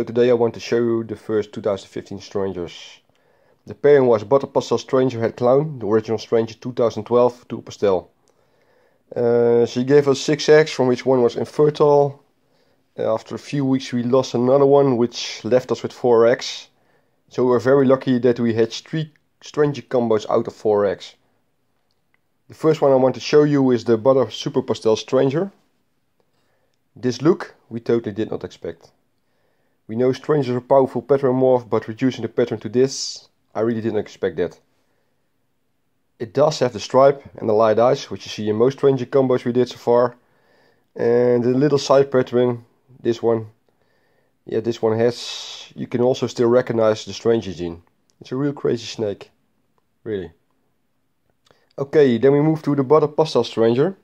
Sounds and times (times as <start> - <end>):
Speech: 0.0 - 8.2, 9.1 - 12.3, 13.0 - 21.2, 22.5 - 25.7, 27.0 - 29.0, 29.9 - 34.7, 36.2 - 40.2, 41.0 - 43.6, 44.4 - 49.4, 50.0 - 50.4, 51.7 - 54.0
Inside, small room: 0.0 - 54.0.